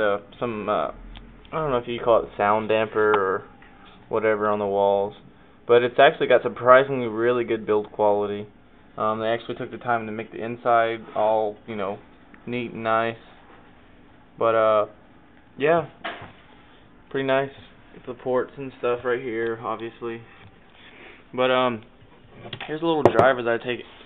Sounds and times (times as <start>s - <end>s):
Speech: 0.0s - 13.4s, 14.4s - 15.0s, 15.6s - 16.0s, 17.1s - 20.4s, 21.3s - 21.9s, 22.6s - 24.0s.